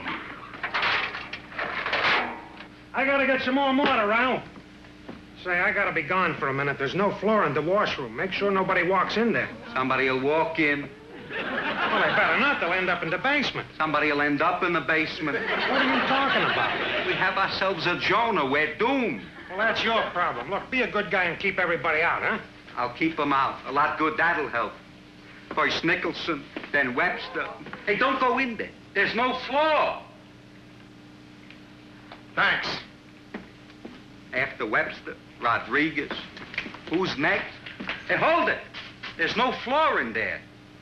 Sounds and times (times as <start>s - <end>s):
Speech: 2.9s - 4.5s, 5.4s - 10.9s, 11.9s - 24.8s, 25.5s - 30.2s, 32.4s - 32.9s, 34.3s - 36.3s, 36.9s - 40.5s.